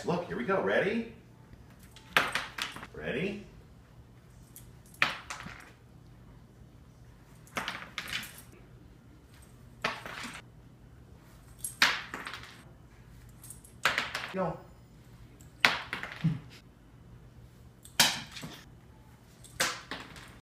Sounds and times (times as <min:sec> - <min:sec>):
Speech: 0:00.0 - 0:01.2, 0:02.9 - 0:03.6, 0:14.4 - 0:14.7.